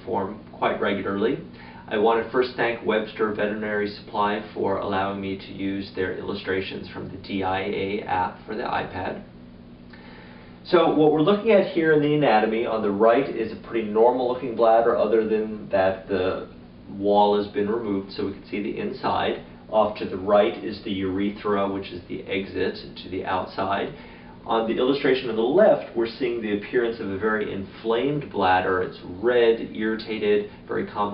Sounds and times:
Speech: 0.0 - 9.3, 10.6 - 31.1.

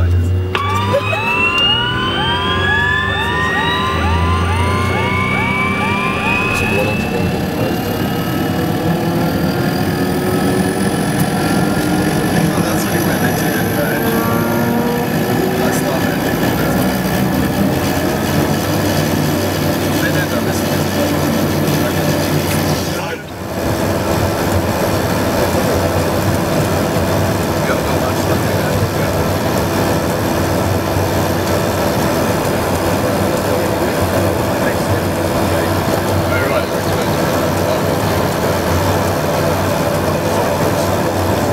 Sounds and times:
Speech: 12.2 - 14.5, 15.4 - 17.0, 19.8 - 23.4, 27.6 - 29.3, 33.4 - 38.4.

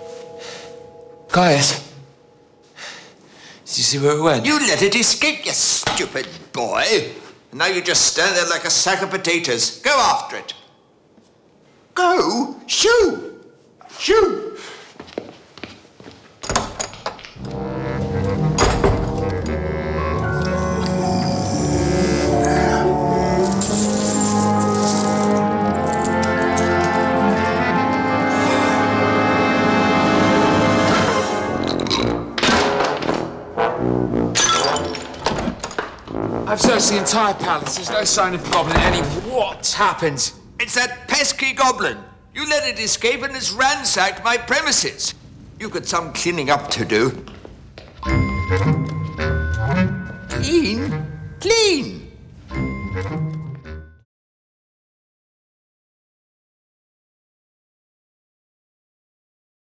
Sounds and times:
Music: 0.0 - 3.0, 17.4 - 37.6, 48.0 - 51.8, 52.5 - 54.1
Speech: 1.3 - 2.0, 3.7 - 10.7, 12.0 - 14.6, 36.5 - 47.3, 50.3 - 52.1.

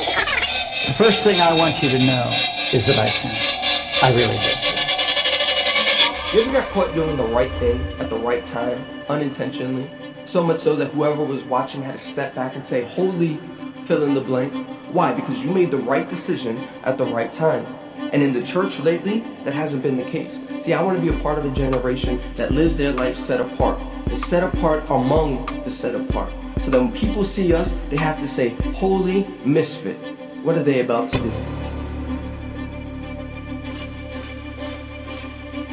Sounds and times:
Music: 0.0 - 35.7
Speech: 0.9 - 3.4, 4.0 - 4.9, 6.3 - 31.5.

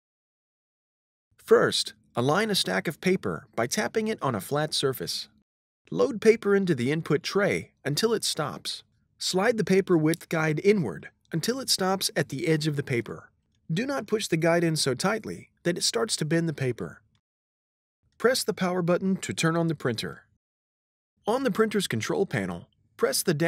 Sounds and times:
Speech: 1.4 - 17.0, 18.2 - 20.3, 21.3 - 23.4.

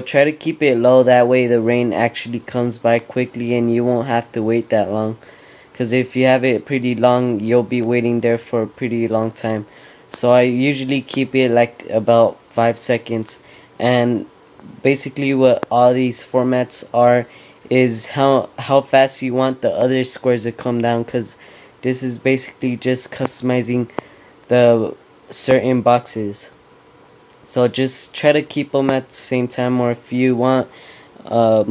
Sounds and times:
Speech: 0.0 - 5.2, 5.8 - 23.9, 24.5 - 26.6, 27.4 - 31.7.

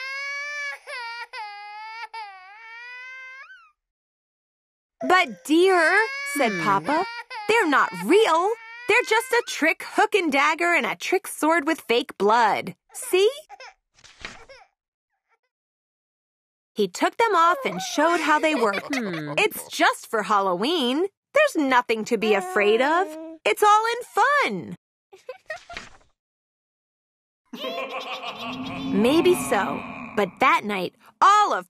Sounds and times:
Speech: 5.0 - 13.5, 16.8 - 24.8, 28.4 - 31.7.

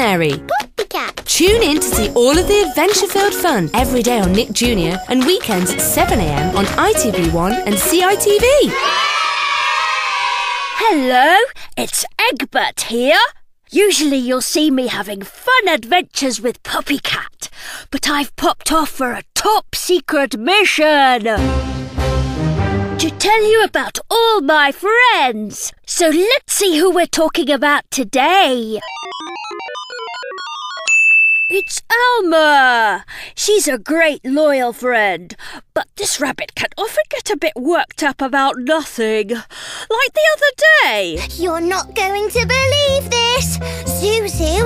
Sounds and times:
Speech: 0.0 - 8.8, 10.8 - 21.4, 23.0 - 28.8, 31.6 - 44.6.

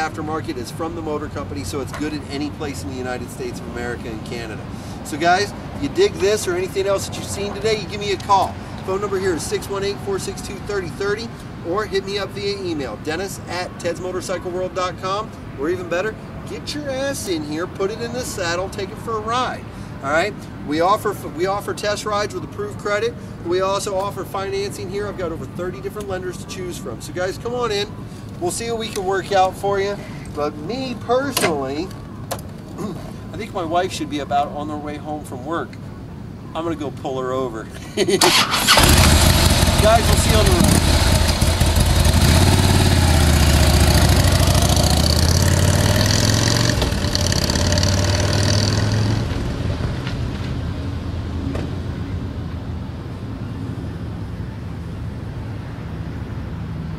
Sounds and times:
Speech: 0.0 - 32.0, 32.8 - 35.8, 36.5 - 37.7, 39.8 - 40.9
Motorcycle: 38.2 - 52.0.

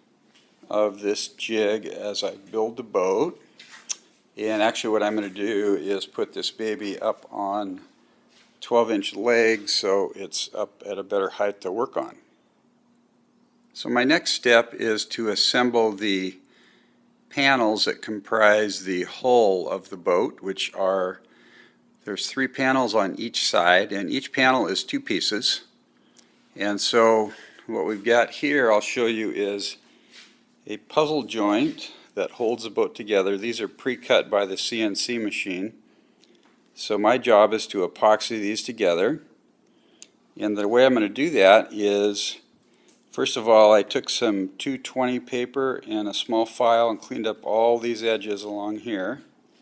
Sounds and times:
Speech: 0.6 - 3.4, 4.4 - 8.0, 8.6 - 12.3, 13.8 - 16.4, 17.3 - 21.3, 22.0 - 25.8, 26.6 - 29.8, 30.6 - 35.8, 36.8 - 39.3, 40.4 - 42.5, 43.1 - 49.3.

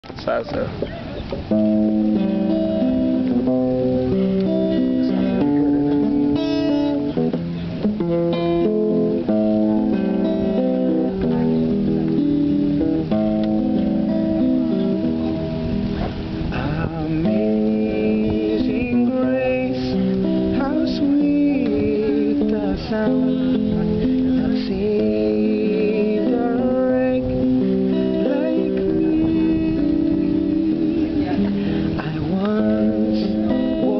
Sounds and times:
Speech: 0.1 - 0.8.

